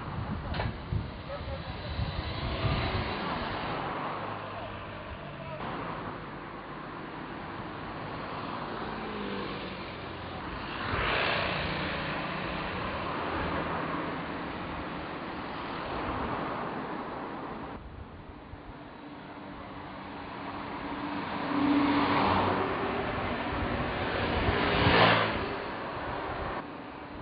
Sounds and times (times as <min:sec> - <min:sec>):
Vehicle: 0:00.0 - 0:27.2.